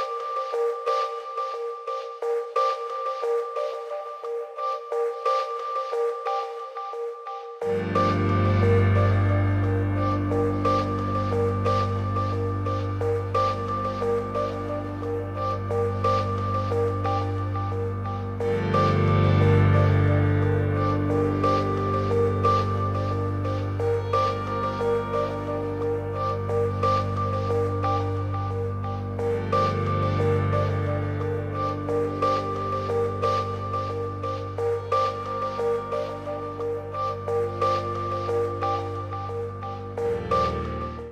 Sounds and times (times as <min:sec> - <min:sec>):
Music: 0:00.0 - 0:41.1.